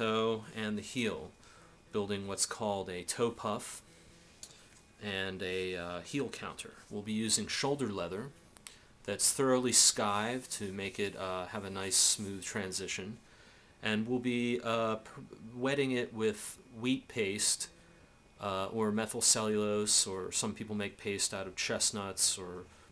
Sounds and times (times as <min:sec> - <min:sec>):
Speech: 0:00.0 - 0:03.8, 0:05.0 - 0:08.4, 0:09.1 - 0:13.2, 0:13.8 - 0:17.7, 0:18.4 - 0:22.7.